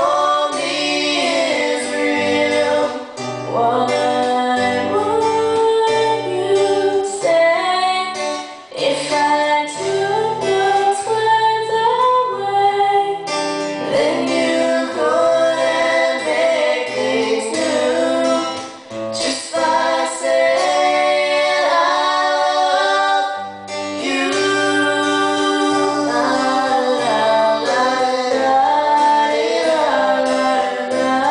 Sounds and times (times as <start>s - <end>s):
Singing: 0.0s - 8.2s, 13.8s - 31.3s
Guitar: 0.0s - 31.3s.